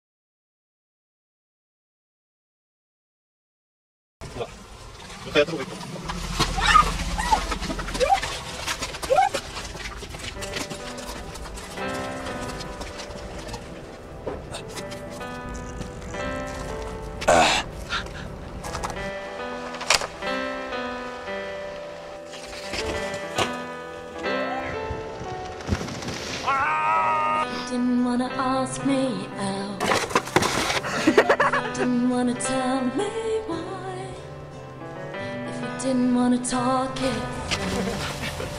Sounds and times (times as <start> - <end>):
Speech: 5.3 - 5.8
Music: 6.0 - 38.5.